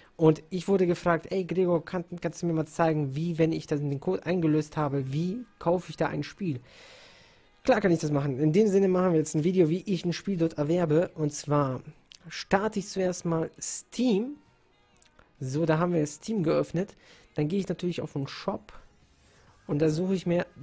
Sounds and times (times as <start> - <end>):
Speech: 0.2 - 6.6, 7.6 - 14.4, 15.4 - 18.8, 19.7 - 20.6.